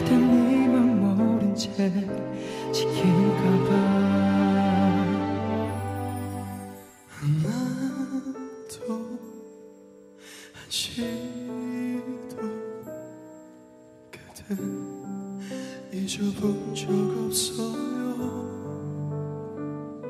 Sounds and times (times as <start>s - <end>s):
Music: 0.0s - 20.1s.